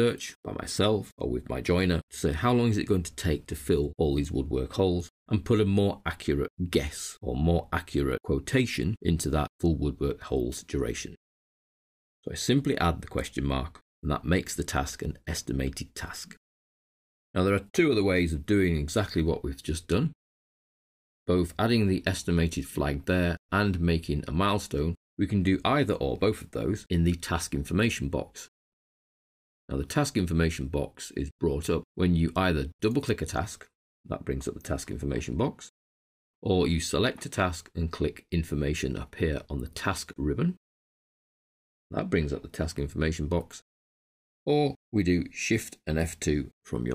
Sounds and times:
Narration, monologue: 0.0s - 11.2s, 12.2s - 16.4s, 17.4s - 20.2s, 21.3s - 28.6s, 29.7s - 35.8s, 36.4s - 40.6s, 41.9s - 43.7s, 44.5s - 46.9s.

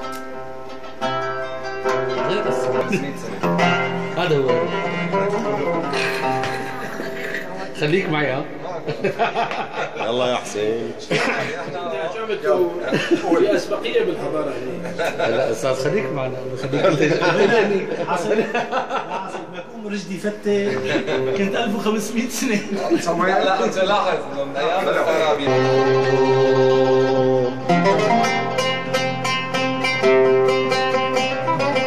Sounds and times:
Speech: 10.0s - 25.8s.

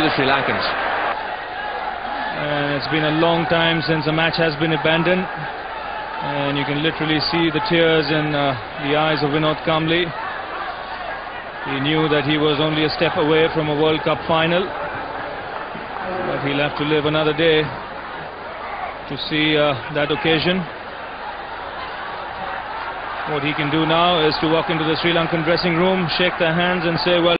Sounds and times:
Speech: 0.0s - 0.8s, 2.4s - 5.4s, 6.2s - 10.1s, 11.7s - 14.7s, 16.0s - 17.8s, 19.1s - 20.7s, 23.3s - 27.3s.

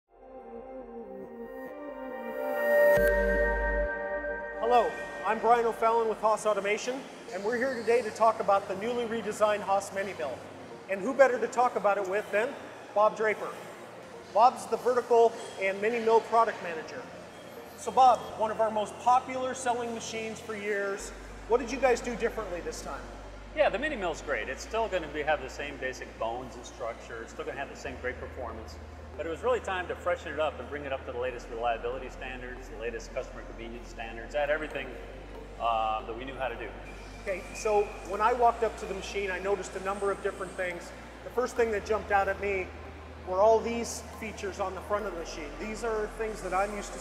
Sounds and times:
Music: 0.1s - 47.0s
Speech: 4.6s - 13.7s, 14.3s - 17.1s, 17.8s - 35.0s, 35.6s - 47.0s.

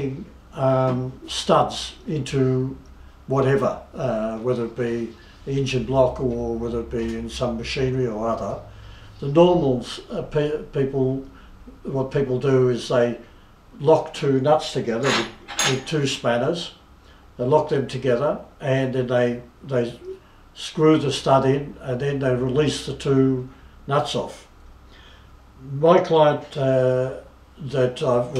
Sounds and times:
Speech: 0.0s - 16.8s, 17.4s - 24.5s, 25.6s - 28.3s.

